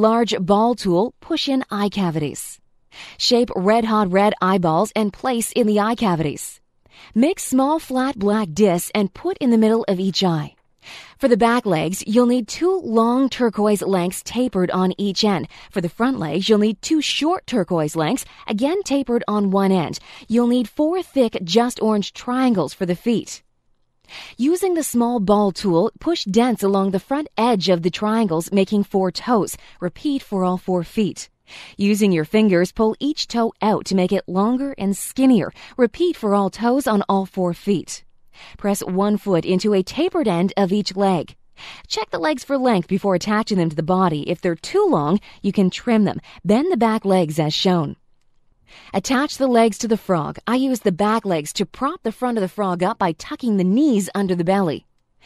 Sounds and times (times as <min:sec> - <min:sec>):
Speech: 0:00.0 - 0:02.6, 0:03.2 - 0:10.6, 0:11.2 - 0:23.4, 0:24.4 - 0:38.0, 0:38.6 - 0:48.0, 0:48.9 - 0:54.8.